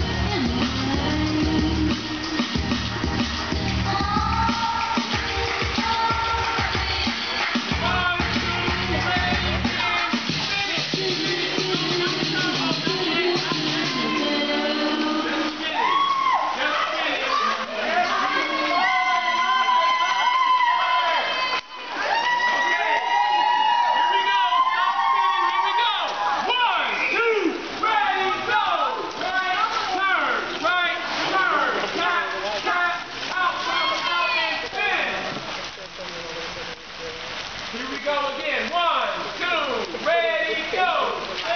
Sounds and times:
Female singing: 0.0s - 2.7s, 3.4s - 7.9s, 9.9s - 15.8s
Choir: 3.6s - 7.8s, 10.8s - 15.8s.

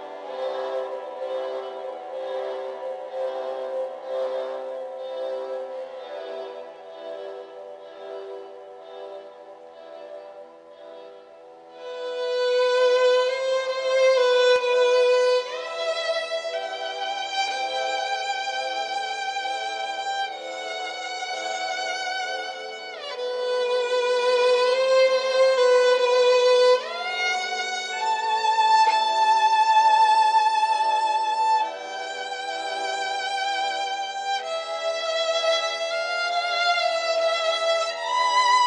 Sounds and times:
Violin, fiddle: 0.0s - 38.6s.

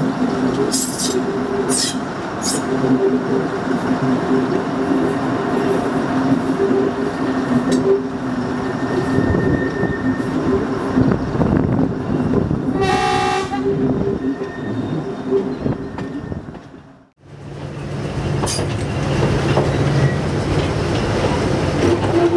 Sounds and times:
Railroad car, train wagon: 0.0s - 22.3s
Train: 0.0s - 22.3s.

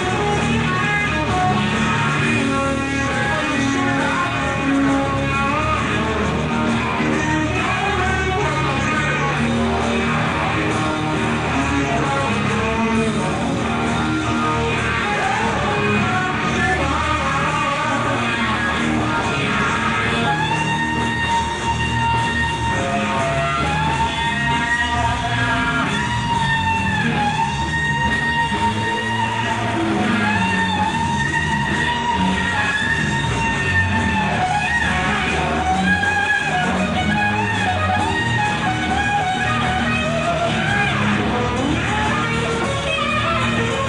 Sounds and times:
Guitar: 0.0s - 43.8s
Psychedelic rock: 0.0s - 43.8s.

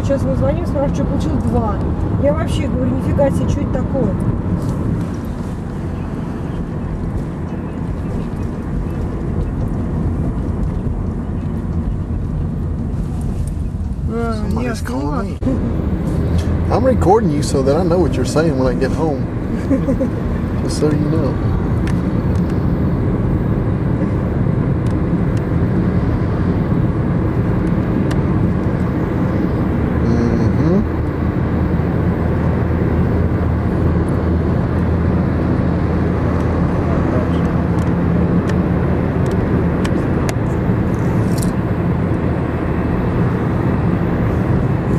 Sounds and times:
Car: 0.0s - 44.9s
Speech: 30.0s - 30.8s.

